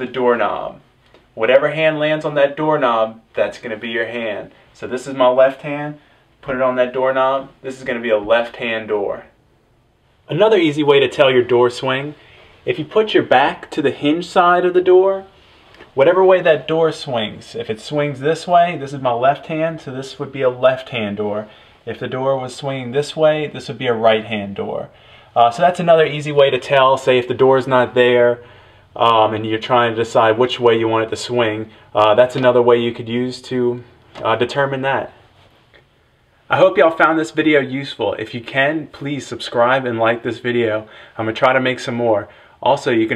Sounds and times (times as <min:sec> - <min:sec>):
Speech: 0:00.0 - 0:09.4, 0:10.3 - 0:35.2, 0:36.5 - 0:43.1.